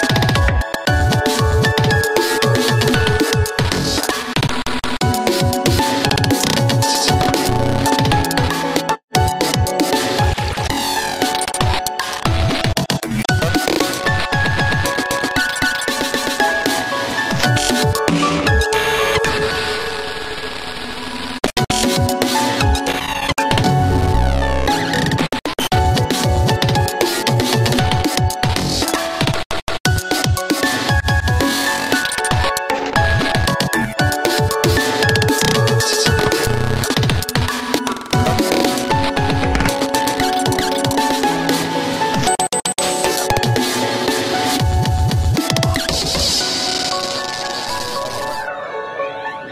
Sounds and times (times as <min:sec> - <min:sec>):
Music: 0:00.0 - 0:49.5.